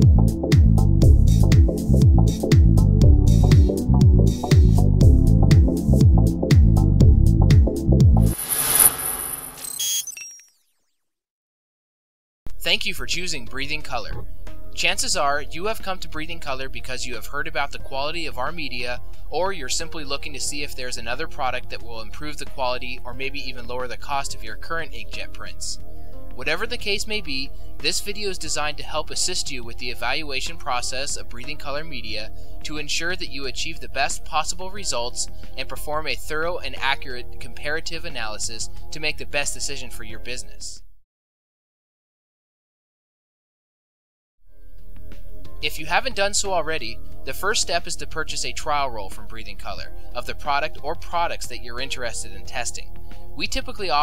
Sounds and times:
Music: 0:00.0 - 0:09.0, 0:12.5 - 0:41.0, 0:44.4 - 0:54.0
Speech: 0:12.5 - 0:25.8, 0:26.4 - 0:40.9, 0:45.6 - 0:54.0.

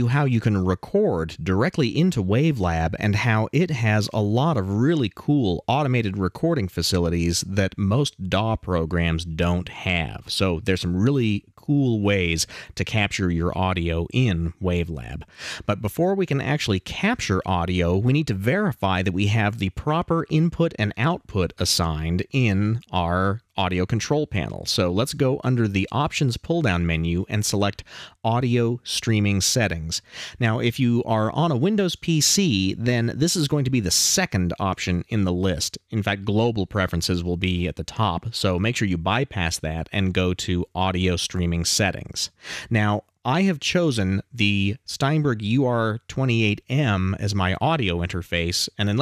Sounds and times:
Speech: 0:00.0 - 0:49.0.

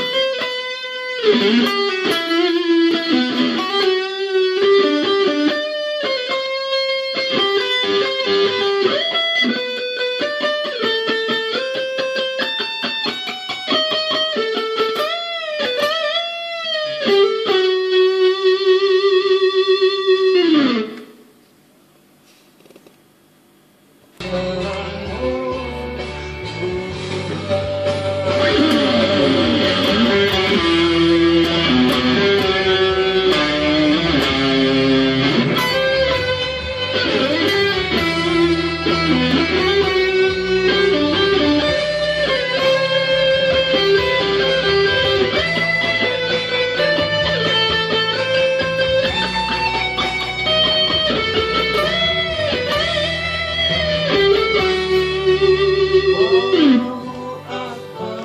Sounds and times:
Electric guitar: 0:00.0 - 0:21.2, 0:24.2 - 0:58.2.

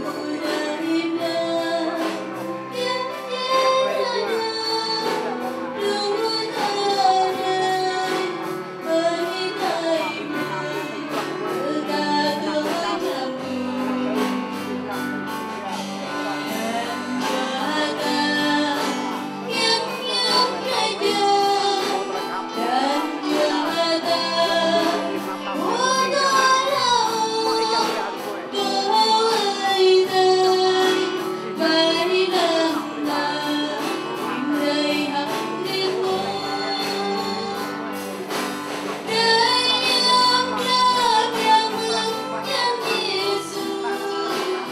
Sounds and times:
Vocal music: 0:00.0 - 0:44.7.

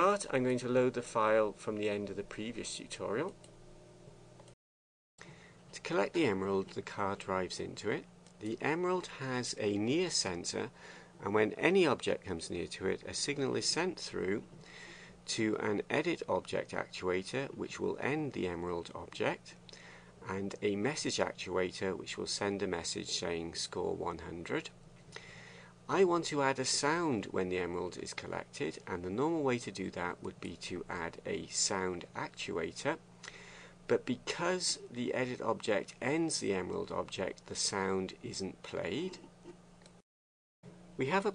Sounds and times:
Speech: 0:00.0 - 0:03.4, 0:05.7 - 0:14.5, 0:15.3 - 0:19.6, 0:20.2 - 0:24.8, 0:25.9 - 0:33.0, 0:33.9 - 0:39.3, 0:41.0 - 0:41.3.

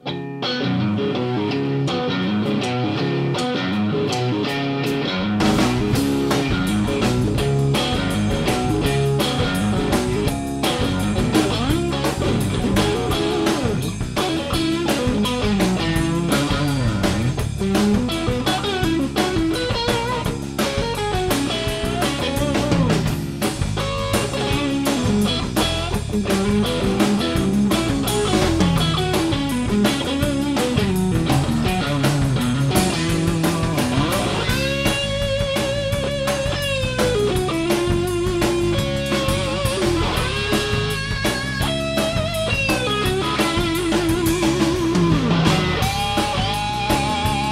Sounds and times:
Music: 0:00.0 - 0:47.5.

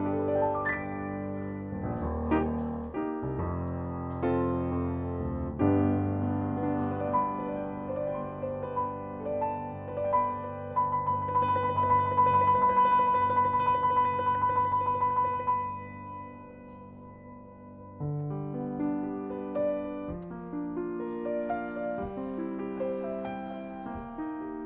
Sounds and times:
Music: 0:00.0 - 0:24.6.

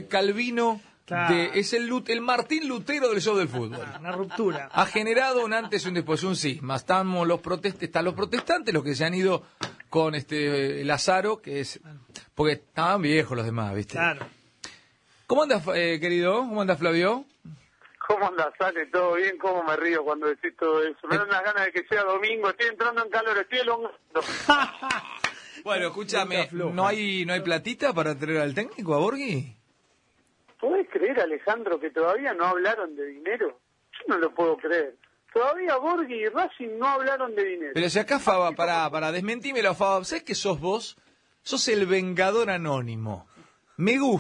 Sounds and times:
Speech: 0:00.0 - 0:14.3, 0:15.3 - 0:24.3, 0:25.6 - 0:29.6, 0:30.6 - 0:44.2
Radio: 0:01.2 - 0:06.4, 0:17.8 - 0:24.5, 0:30.6 - 0:37.8.

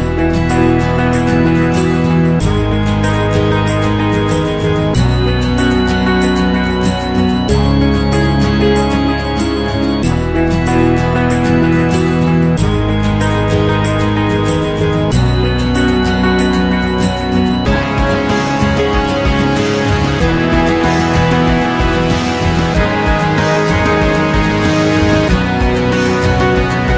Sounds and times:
Background music: 0:00.0 - 0:26.9.

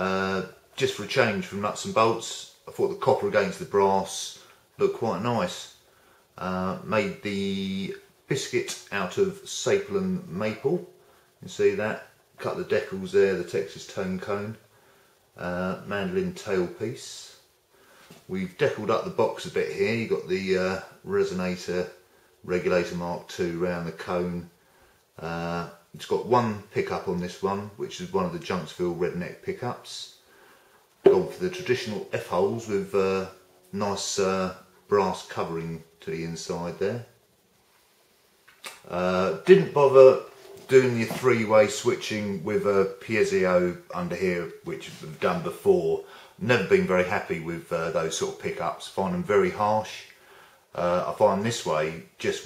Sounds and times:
Speech: 0:00.0 - 0:05.8, 0:06.4 - 0:14.7, 0:15.4 - 0:17.5, 0:18.2 - 0:24.6, 0:25.2 - 0:30.2, 0:31.0 - 0:37.2, 0:38.7 - 0:52.4.

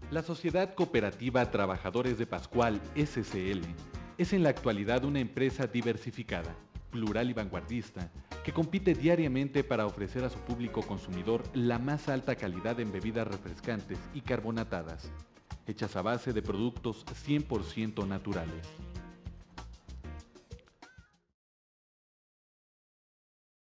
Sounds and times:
Music: 0:00.0 - 0:21.4
Speech: 0:00.1 - 0:15.1, 0:15.7 - 0:18.7.

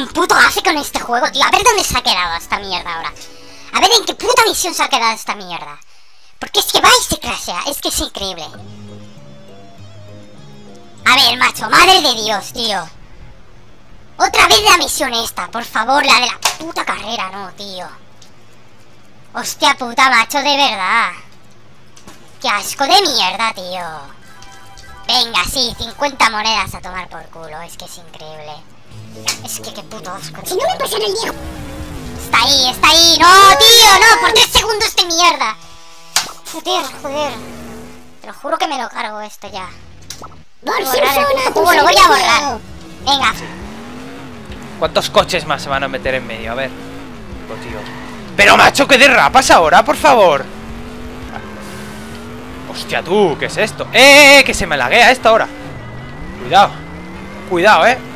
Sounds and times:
Music: 0:08.4 - 0:12.3, 0:24.0 - 0:26.2, 0:28.8 - 0:32.2.

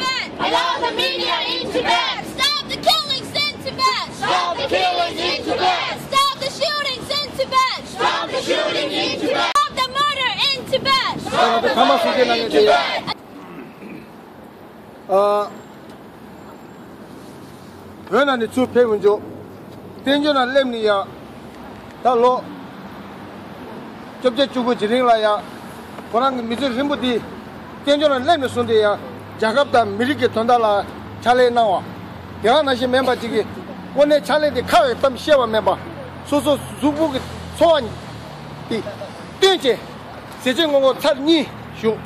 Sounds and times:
Narration, monologue: 0:14.0 - 0:42.0
Male speech, man speaking: 0:15.1 - 0:15.6, 0:18.1 - 0:19.3, 0:20.0 - 0:21.1, 0:22.0 - 0:22.5, 0:24.2 - 0:25.5, 0:26.1 - 0:38.0, 0:38.7 - 0:42.0.

